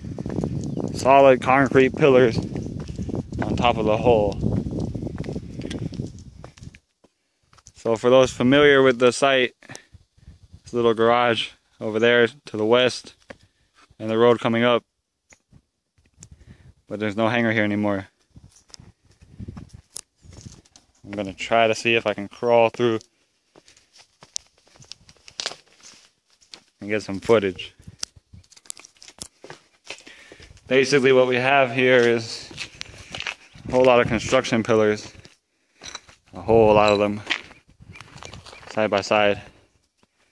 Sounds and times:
Outside, urban or manmade: 0:00.0 - 0:40.3
Speech: 0:01.0 - 0:02.4, 0:03.4 - 0:04.4, 0:07.8 - 0:09.6, 0:10.7 - 0:13.2, 0:14.0 - 0:14.8, 0:16.9 - 0:18.1, 0:21.0 - 0:23.0, 0:26.8 - 0:27.8, 0:30.7 - 0:32.6, 0:33.7 - 0:35.2, 0:36.3 - 0:37.3, 0:38.7 - 0:39.5.

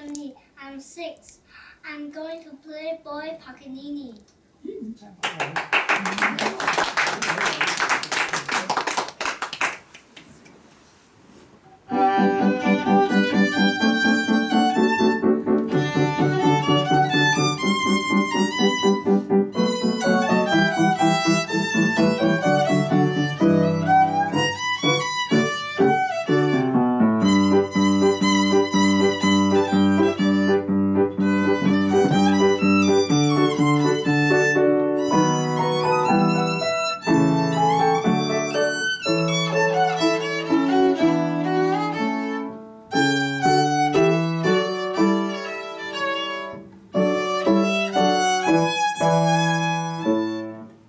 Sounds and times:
Violin, fiddle: 0:11.9 - 0:50.7.

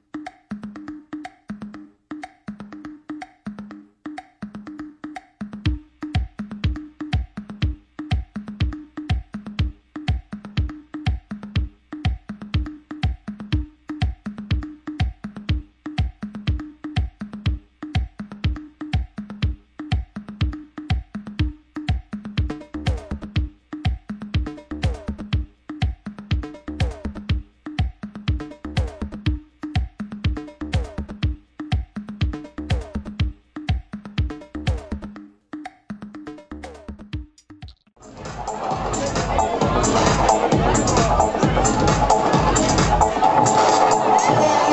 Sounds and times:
Electronica: 0:00.0 - 0:44.7.

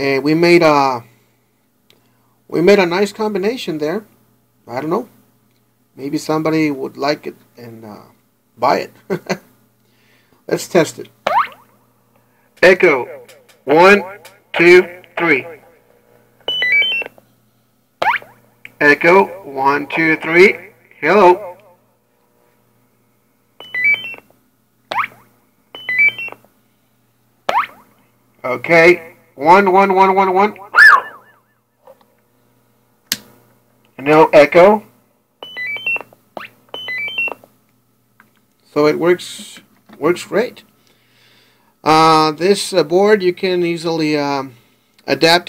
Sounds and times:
Speech: 0:00.0 - 0:01.1, 0:02.5 - 0:04.1, 0:04.7 - 0:05.2, 0:06.0 - 0:09.0, 0:10.5 - 0:11.1, 0:12.6 - 0:15.8, 0:18.8 - 0:21.6, 0:28.4 - 0:30.6, 0:34.0 - 0:34.9, 0:38.6 - 0:40.7, 0:41.8 - 0:45.4.

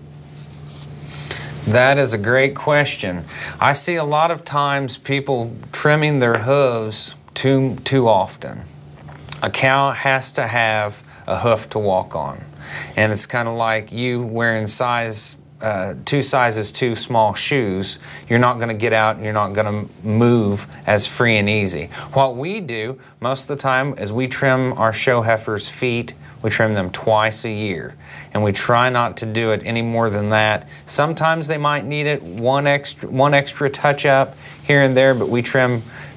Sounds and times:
Speech: 0:01.7 - 0:08.7, 0:09.3 - 0:36.0.

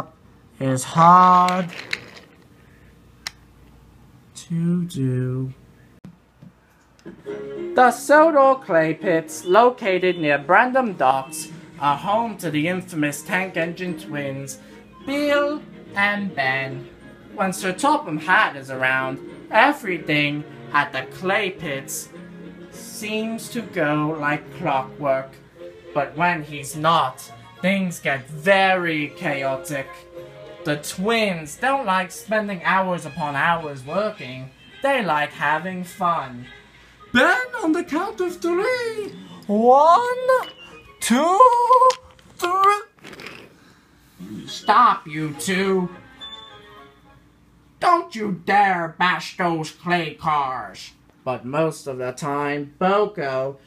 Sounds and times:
Speech: 0:00.0 - 0:01.8, 0:04.4 - 0:05.6, 0:07.8 - 0:22.1, 0:22.8 - 0:25.4, 0:26.0 - 0:30.0, 0:30.6 - 0:36.5, 0:37.1 - 0:43.0, 0:44.2 - 0:46.0, 0:47.8 - 0:53.6
Music: 0:07.0 - 0:42.2, 0:43.7 - 0:49.7.

